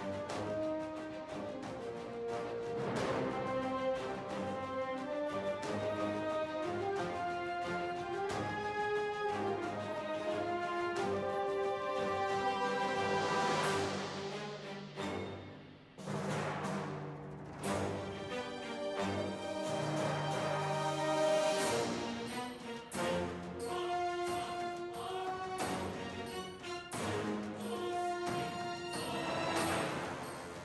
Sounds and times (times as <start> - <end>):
Music: 0.0 - 30.6.